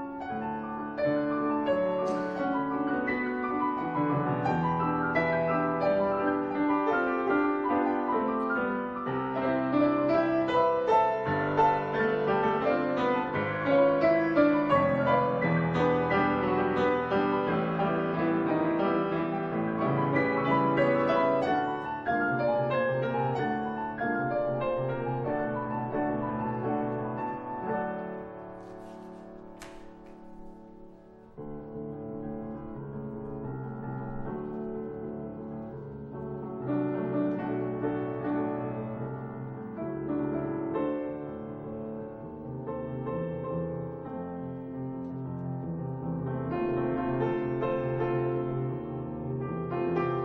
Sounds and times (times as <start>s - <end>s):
Classical music: 0.0s - 50.2s
Piano: 0.0s - 50.2s.